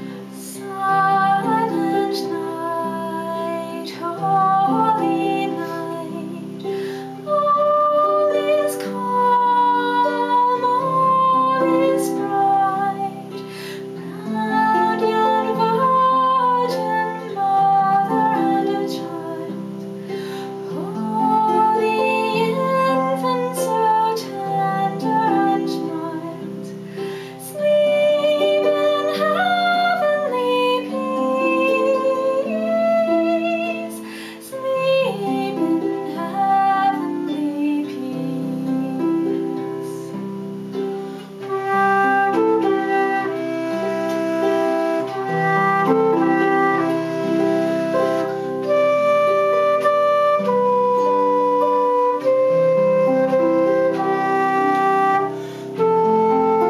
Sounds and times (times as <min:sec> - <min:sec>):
Female singing: 0:00.0 - 0:19.8, 0:20.6 - 0:26.8, 0:27.4 - 0:40.2
Music: 0:00.0 - 0:56.6.